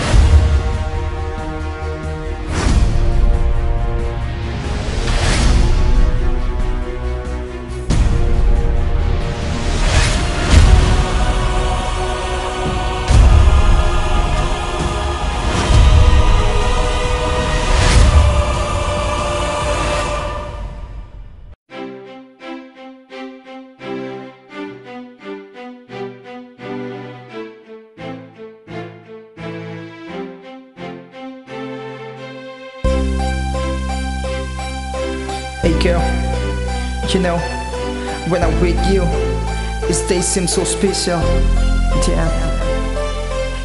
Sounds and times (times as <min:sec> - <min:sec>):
Music: 0:00.0 - 0:43.6.